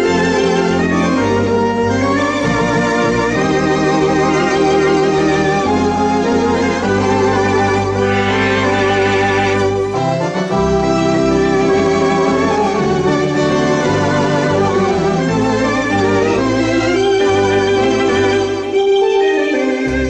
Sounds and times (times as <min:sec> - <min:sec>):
Hammond organ: 0:00.0 - 0:20.0.